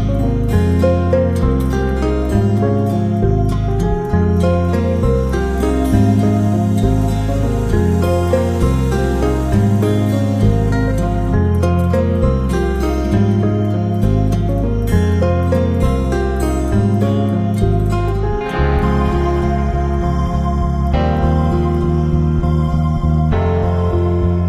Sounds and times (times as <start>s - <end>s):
New-age music: 0.0s - 24.4s.